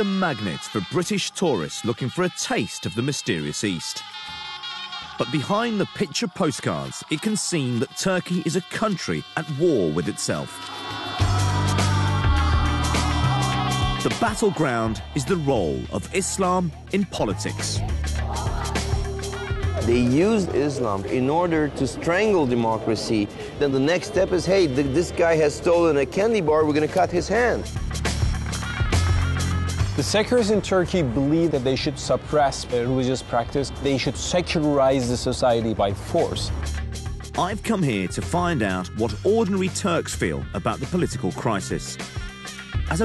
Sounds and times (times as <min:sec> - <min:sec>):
Speech: 0:00.0 - 0:04.0, 0:05.2 - 0:10.6, 0:14.1 - 0:17.8, 0:19.8 - 0:27.7, 0:30.0 - 0:36.5, 0:37.4 - 0:42.0
Music: 0:00.0 - 0:43.0.